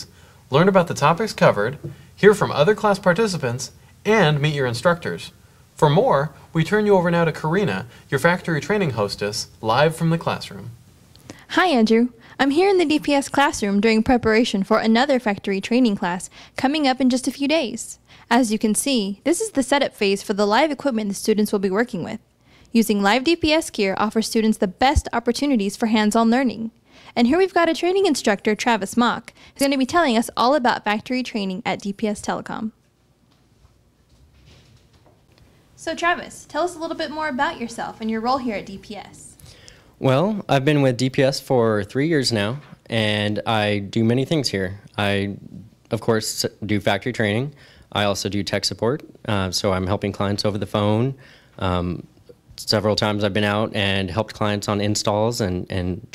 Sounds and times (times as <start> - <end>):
Speech: 0.0 - 10.8, 11.5 - 22.2, 35.8 - 39.4, 40.0 - 56.1.